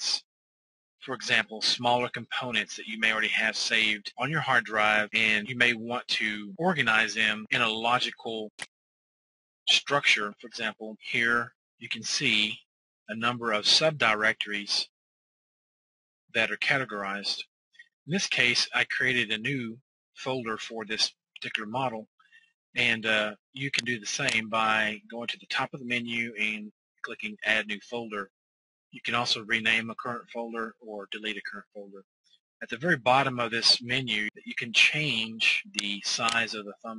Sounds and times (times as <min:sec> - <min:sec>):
Speech: 0:00.0 - 0:00.2, 0:01.0 - 0:08.7, 0:09.7 - 0:14.9, 0:16.4 - 0:17.5, 0:18.1 - 0:22.1, 0:22.8 - 0:28.3, 0:29.0 - 0:32.0, 0:32.6 - 0:36.9.